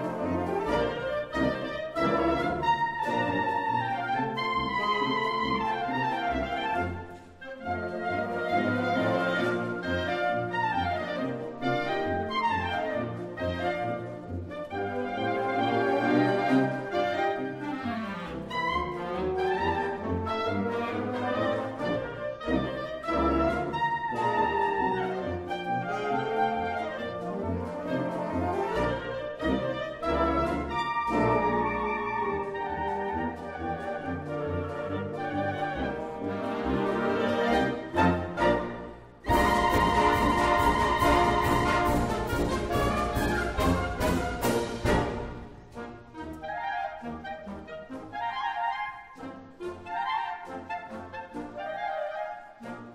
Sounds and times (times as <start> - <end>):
Classical music: 0.0 - 52.9
Orchestra: 0.0 - 52.9.